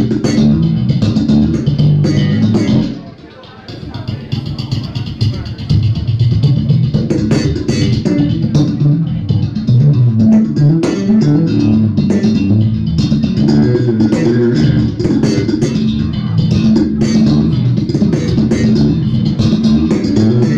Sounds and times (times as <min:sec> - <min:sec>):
Bass guitar: 0:00.0 - 0:20.5.